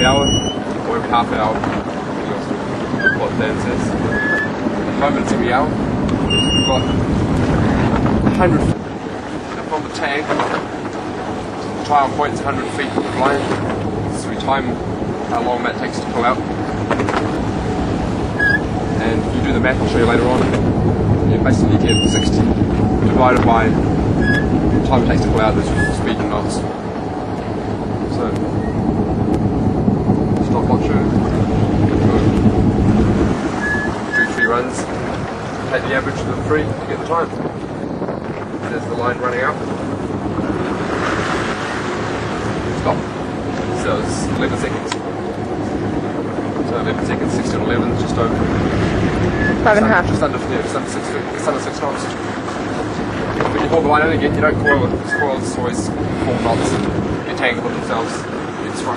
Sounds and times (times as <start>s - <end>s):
Speech: 0.0s - 1.6s, 2.2s - 4.0s, 5.0s - 5.8s, 6.5s - 7.0s, 8.3s - 8.8s, 9.6s - 10.5s, 11.6s - 16.5s, 19.0s - 20.6s, 21.3s - 23.8s, 24.8s - 26.7s, 28.1s - 28.4s, 30.4s - 31.2s, 32.0s - 32.4s, 34.3s - 34.9s, 35.7s - 37.4s, 38.6s - 39.6s, 42.8s - 43.1s, 43.8s - 45.0s, 46.7s - 48.4s, 49.6s - 52.2s, 53.5s - 58.9s
Ocean: 0.0s - 58.9s
Ship: 0.0s - 58.9s.